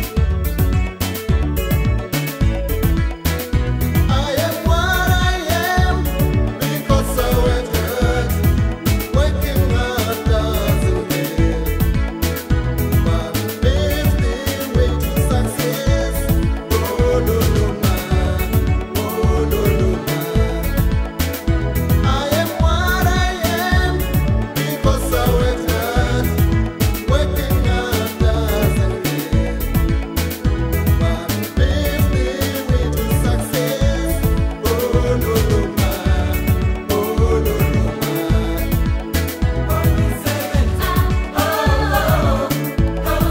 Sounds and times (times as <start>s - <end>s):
Music: 0.0s - 43.3s.